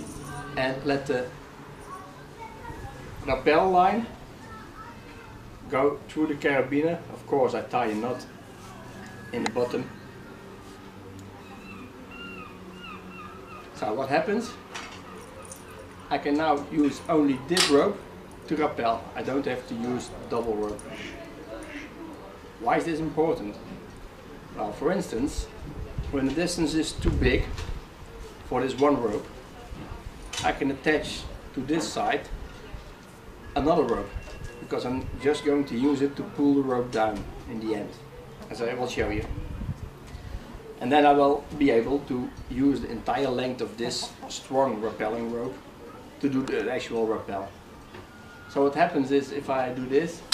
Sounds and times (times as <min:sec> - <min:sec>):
Outside, urban or manmade: 0:00.0 - 0:50.3.